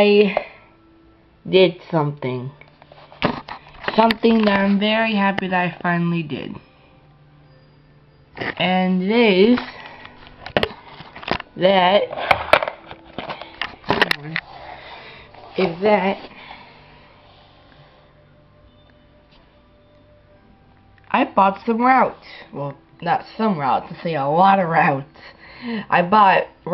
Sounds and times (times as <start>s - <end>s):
Speech: 1.5s - 2.6s, 3.9s - 6.6s, 21.1s - 25.1s, 25.9s - 26.7s.